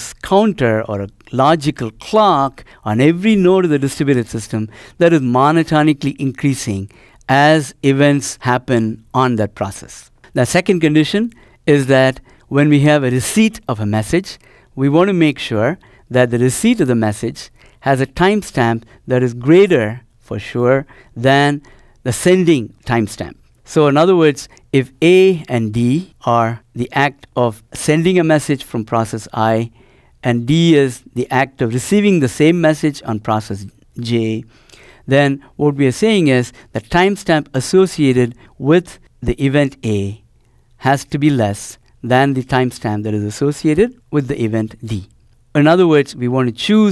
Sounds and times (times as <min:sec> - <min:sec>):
Speech: 0:00.0 - 0:34.5, 0:35.1 - 0:46.9.